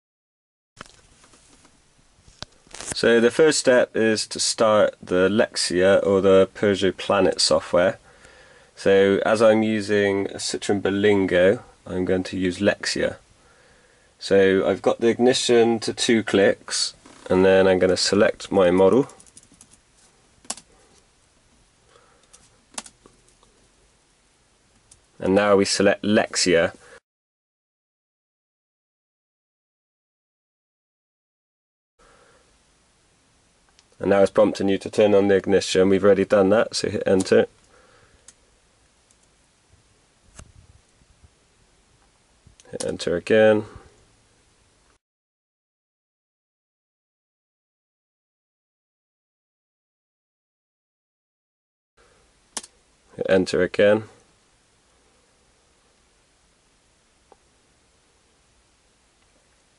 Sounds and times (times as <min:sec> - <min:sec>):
Speech: 0:03.0 - 0:08.0, 0:08.8 - 0:13.2, 0:14.2 - 0:19.2, 0:25.2 - 0:26.8, 0:34.0 - 0:37.5, 0:42.6 - 0:43.9, 0:53.2 - 0:54.2.